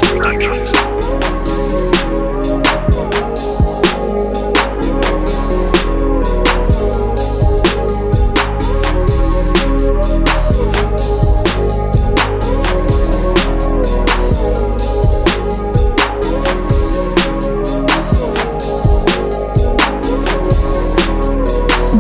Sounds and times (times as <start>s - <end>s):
Music: 0.0s - 22.0s.